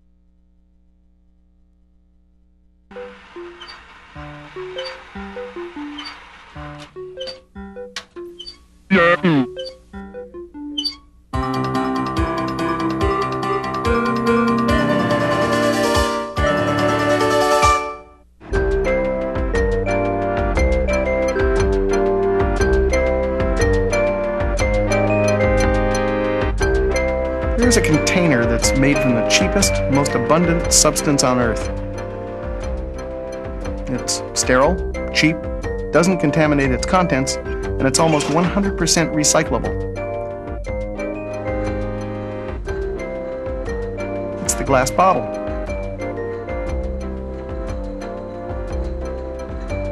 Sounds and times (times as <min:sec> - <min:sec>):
Music: 0:02.9 - 0:49.9
Speech: 0:08.9 - 0:09.5, 0:27.6 - 0:31.7, 0:33.9 - 0:35.4, 0:36.0 - 0:39.7, 0:44.4 - 0:45.3.